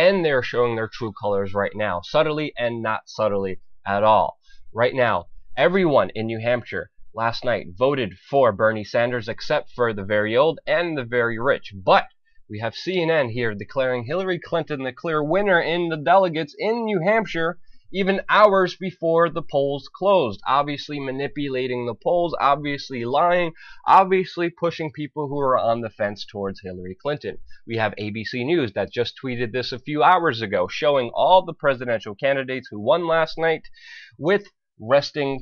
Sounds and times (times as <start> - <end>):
Speech: 0.0 - 35.4.